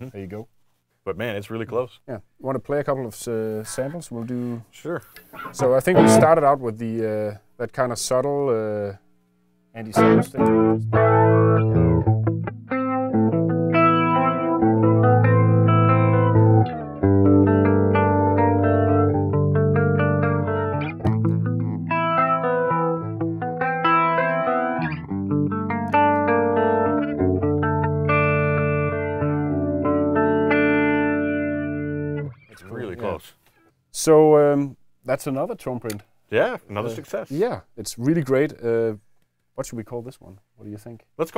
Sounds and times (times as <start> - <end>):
Guitar: 5.2 - 6.6, 9.8 - 34.5
Effects unit: 5.3 - 6.5, 9.9 - 32.6.